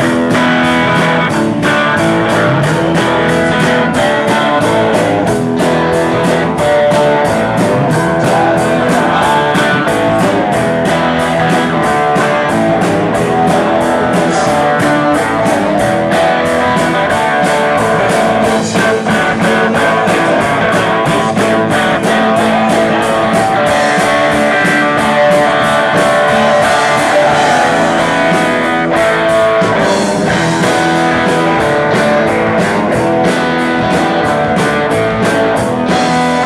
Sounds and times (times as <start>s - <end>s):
Rock and roll: 0.0s - 36.4s.